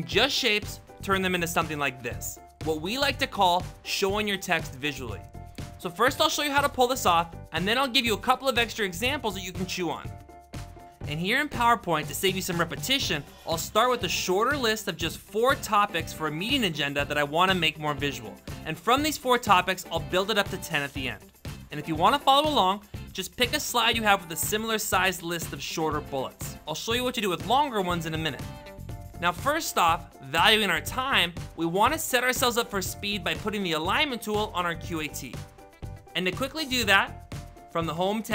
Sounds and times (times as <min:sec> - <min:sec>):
Speech: 0:00.0 - 0:05.2, 0:05.8 - 0:10.1, 0:11.1 - 0:28.5, 0:29.2 - 0:35.4, 0:36.2 - 0:37.2, 0:37.8 - 0:38.3
Music: 0:00.0 - 0:38.3.